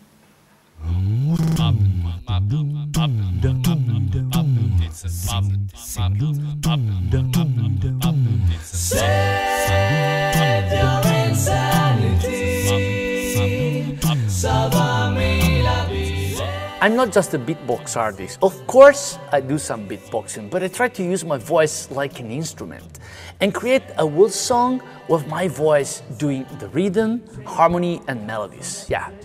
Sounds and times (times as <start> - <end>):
Background music: 6.7 - 29.2
Speech: 16.8 - 29.2.